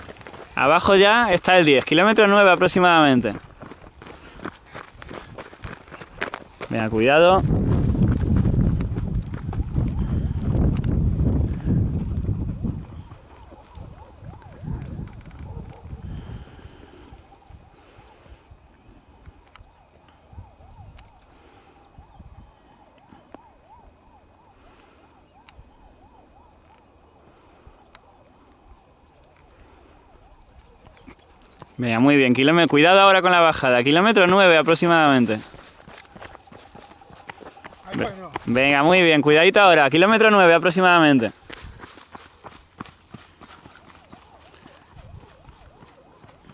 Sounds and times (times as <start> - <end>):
Outside, rural or natural: 0.0 - 46.5.